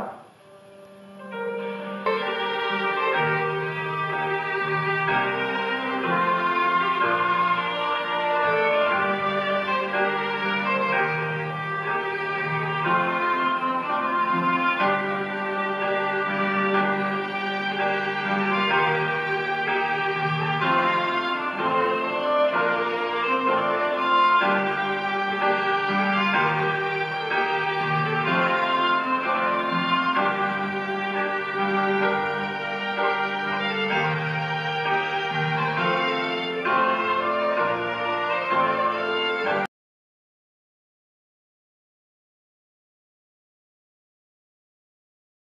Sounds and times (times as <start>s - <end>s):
Music: 0.0s - 39.7s.